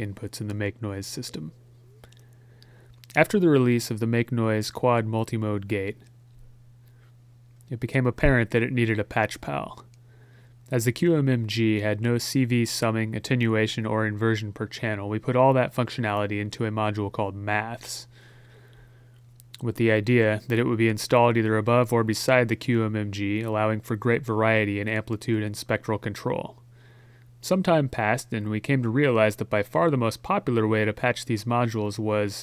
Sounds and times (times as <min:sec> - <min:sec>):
Speech: 0:00.0 - 0:01.6, 0:03.1 - 0:06.1, 0:07.7 - 0:09.9, 0:10.7 - 0:18.1, 0:19.6 - 0:26.6, 0:27.4 - 0:32.4.